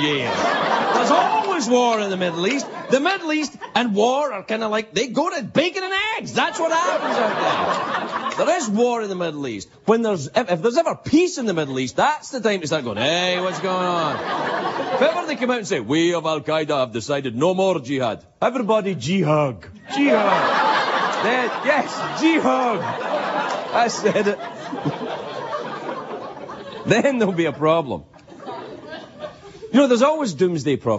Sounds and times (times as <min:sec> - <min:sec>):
Narration, monologue: 0:00.0 - 0:30.9.